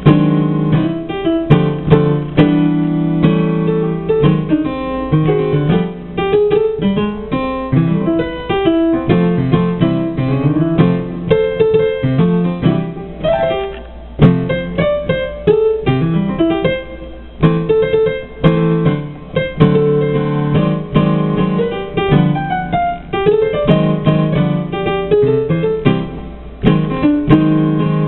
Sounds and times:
Piano: 0.0 - 28.0.

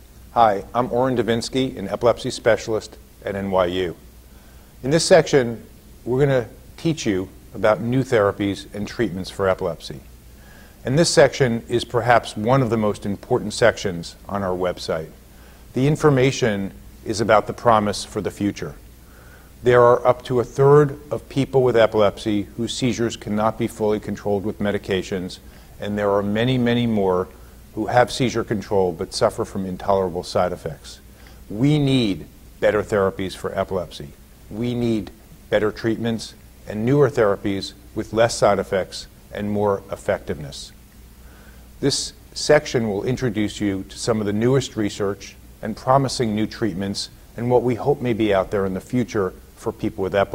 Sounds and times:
Speech: 0.4 - 4.0, 4.8 - 10.1, 10.8 - 18.8, 19.6 - 40.8, 41.8 - 50.3.

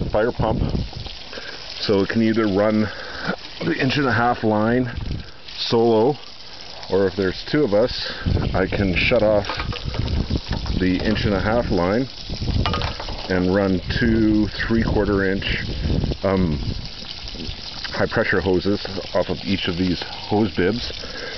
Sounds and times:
Water: 0.0 - 21.3
Speech: 0.1 - 0.6, 1.8 - 2.9, 3.6 - 5.0, 5.6 - 6.2, 6.9 - 9.5, 10.8 - 12.1, 13.3 - 16.6, 17.9 - 21.0.

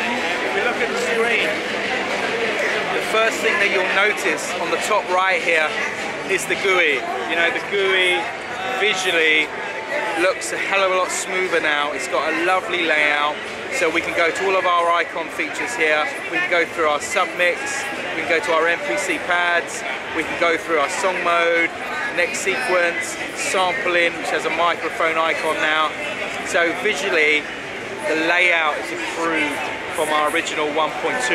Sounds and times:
Speech: 0.0 - 31.3.

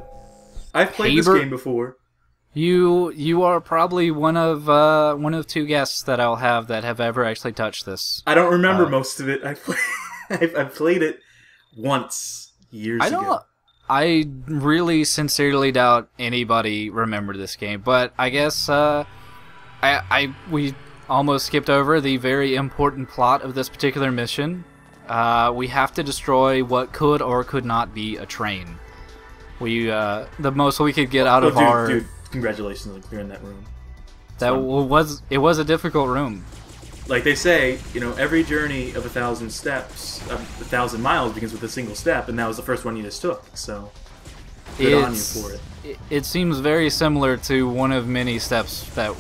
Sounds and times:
Music: 0.0 - 1.8, 17.9 - 49.2
Speech: 0.8 - 2.0, 2.6 - 9.7, 10.3 - 11.2, 11.8 - 19.0, 19.8 - 28.8, 29.6 - 33.6, 34.4 - 36.4, 37.1 - 43.9, 44.8 - 49.2.

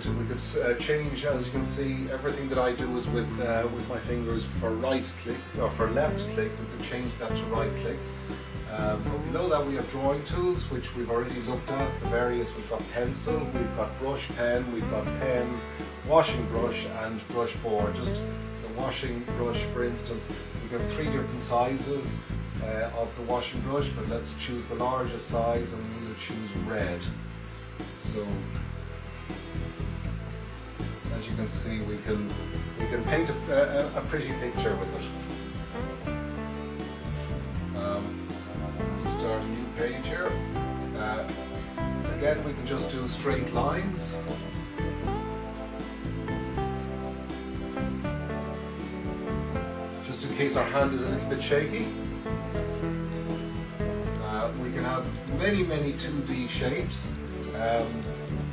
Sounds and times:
Speech: 0.0 - 8.0, 8.7 - 27.2, 28.0 - 28.6, 31.1 - 35.2, 37.8 - 38.2, 39.0 - 41.4, 42.1 - 44.3, 50.0 - 52.0, 54.2 - 58.1
Music: 0.0 - 58.5.

